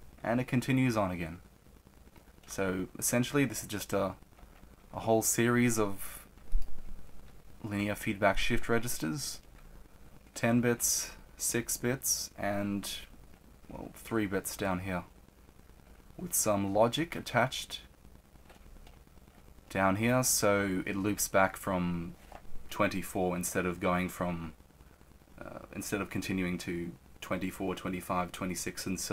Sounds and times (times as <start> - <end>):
Speech: 0.2 - 1.4, 2.5 - 4.2, 4.9 - 6.2, 7.6 - 9.4, 10.4 - 13.1, 13.7 - 15.1, 16.2 - 17.9, 19.7 - 24.6, 25.4 - 29.1.